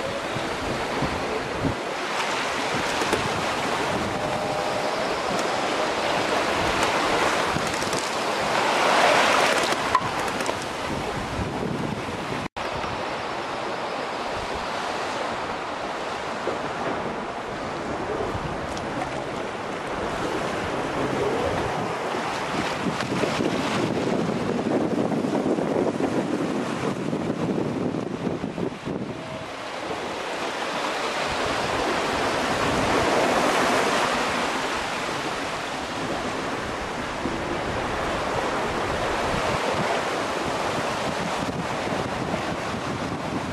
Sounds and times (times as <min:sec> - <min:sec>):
Sailboat, sailing ship: 0:00.0 - 0:43.5.